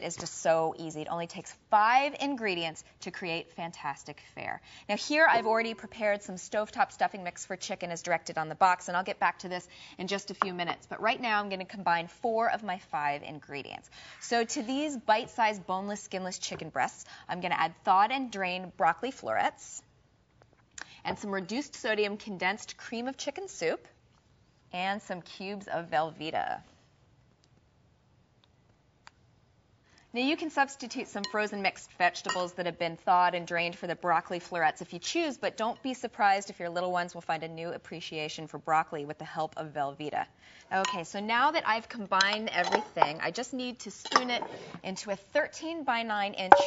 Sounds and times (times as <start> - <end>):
Speech: 0.0 - 19.9, 21.1 - 23.9, 24.8 - 26.7, 30.2 - 46.6.